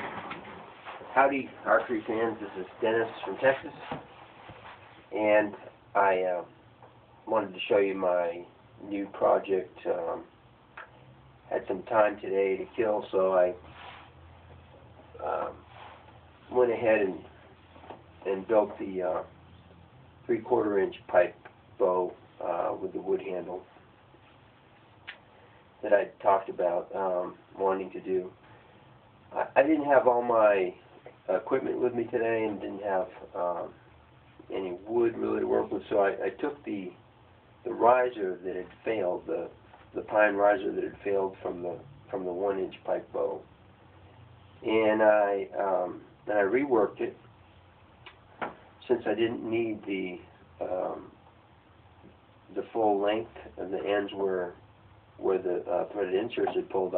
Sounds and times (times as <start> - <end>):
Speech: 1.0 - 4.0, 5.1 - 6.5, 7.3 - 10.3, 11.5 - 13.6, 15.2 - 15.7, 16.5 - 17.3, 18.2 - 19.3, 20.3 - 23.7, 25.8 - 28.4, 29.3 - 33.8, 34.5 - 37.0, 37.7 - 43.5, 44.6 - 47.2, 48.8 - 51.2, 52.5 - 54.6, 55.2 - 56.9.